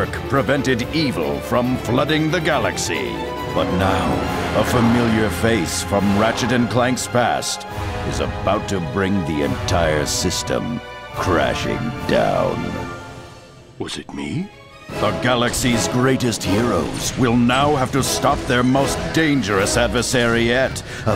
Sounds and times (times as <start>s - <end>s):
Speech: 0.0s - 12.8s, 13.8s - 21.1s
Music: 0.0s - 21.1s.